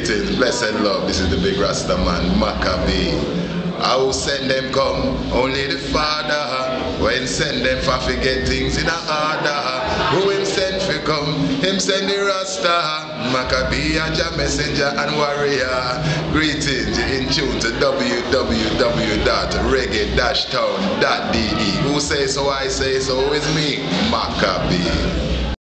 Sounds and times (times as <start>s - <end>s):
Speech: 0.0s - 25.6s.